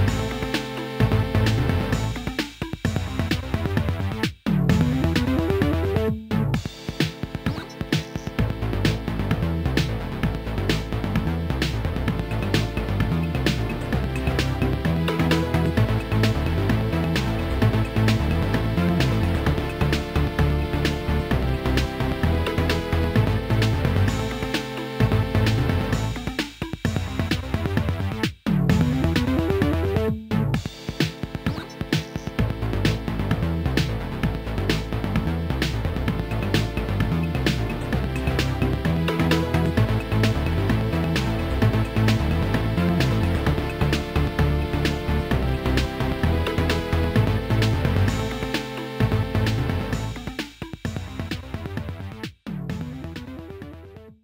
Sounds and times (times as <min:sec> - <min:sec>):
Background music: 0:00.0 - 0:54.2.